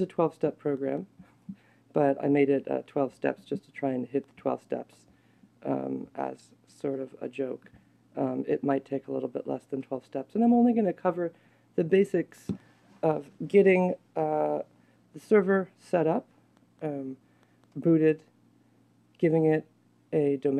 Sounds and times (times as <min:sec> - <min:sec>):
Speech: 0:00.0 - 0:01.2, 0:01.9 - 0:17.2, 0:17.8 - 0:18.3, 0:19.2 - 0:20.5.